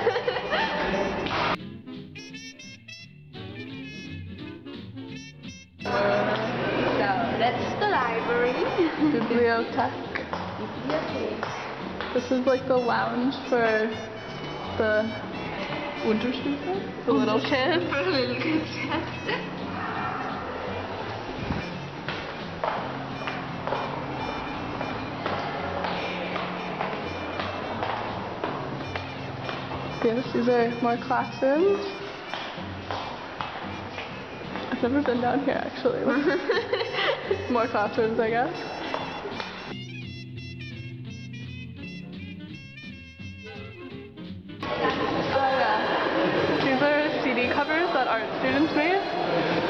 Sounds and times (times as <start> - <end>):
Inside, public space: 0.0 - 49.7
Music: 0.0 - 49.7.